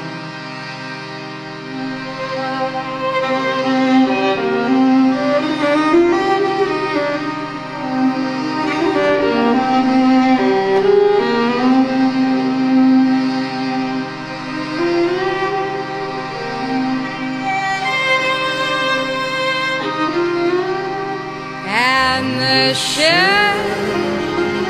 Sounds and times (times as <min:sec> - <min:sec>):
Violin, fiddle: 0:00.0 - 0:21.6.